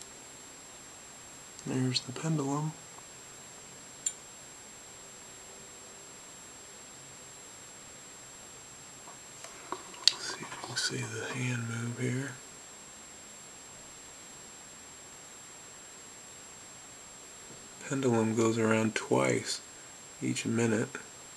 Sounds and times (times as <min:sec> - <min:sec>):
Speech: 0:01.6 - 0:02.8, 0:10.1 - 0:12.4, 0:17.8 - 0:21.1.